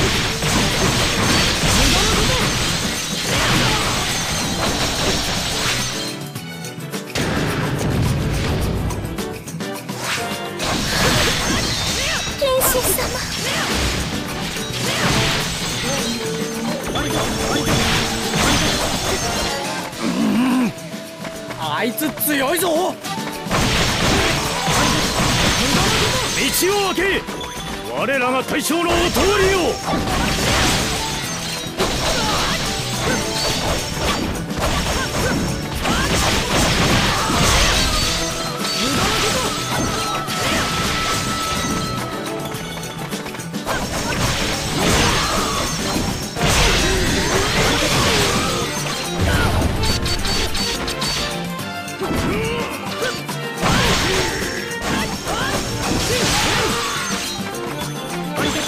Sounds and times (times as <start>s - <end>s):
Smash, crash: 0.0s - 6.0s, 10.0s - 16.2s, 16.9s - 20.0s, 23.4s - 27.2s, 28.9s - 42.0s, 43.6s - 51.2s, 53.6s - 57.4s
Music: 0.0s - 58.6s.